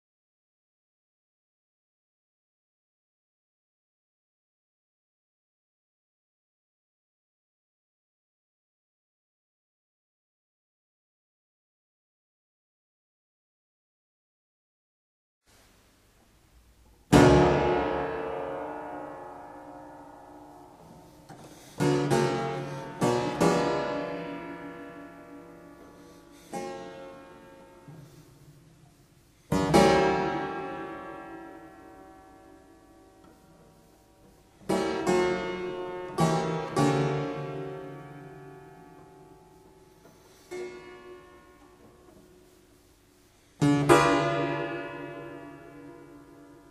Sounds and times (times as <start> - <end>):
Harpsichord: 17.1 - 28.6, 29.5 - 33.9, 34.6 - 42.5, 43.6 - 46.7.